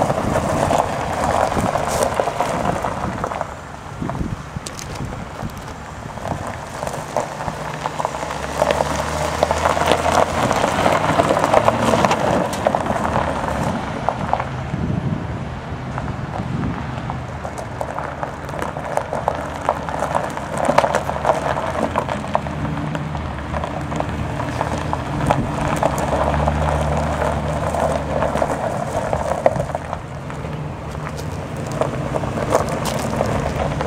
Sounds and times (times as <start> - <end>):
Truck: 0.0 - 33.8.